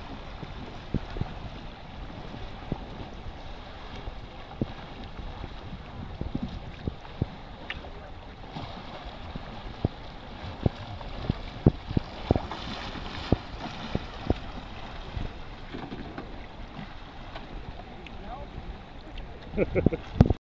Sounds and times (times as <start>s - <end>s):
Rowboat, canoe, kayak: 0.0s - 20.4s
Speech: 18.0s - 19.4s.